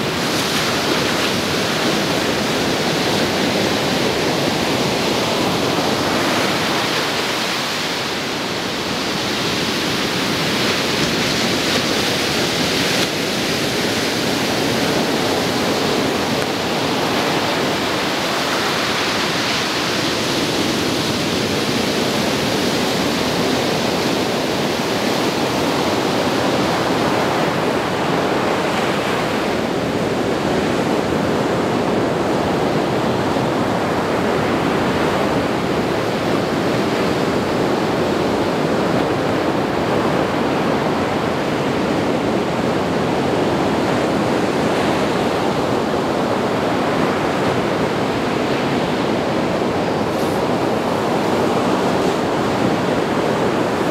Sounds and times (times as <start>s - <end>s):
Ocean: 0.0s - 53.9s.